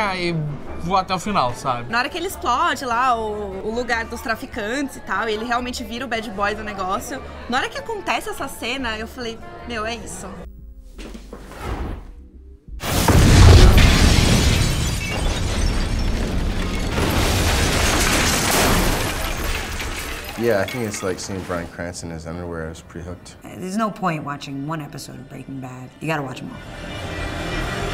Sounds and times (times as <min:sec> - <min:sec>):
Music: 0:00.0 - 0:16.2, 0:19.4 - 0:27.9.